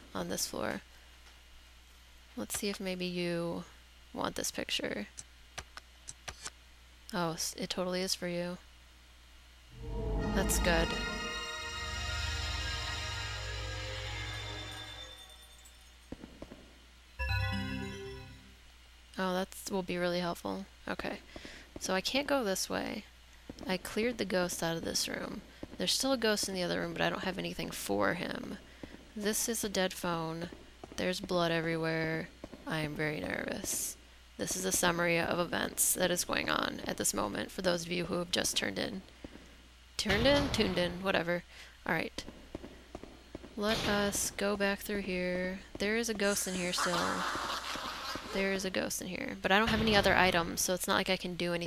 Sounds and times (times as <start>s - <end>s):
Speech: 0.1s - 0.8s, 2.4s - 5.2s, 7.1s - 8.6s, 10.2s - 11.2s, 19.2s - 21.2s, 21.8s - 28.6s, 29.2s - 39.0s, 40.0s - 42.2s, 43.6s - 47.3s, 48.3s - 51.6s
Music: 9.8s - 16.0s, 17.2s - 18.6s.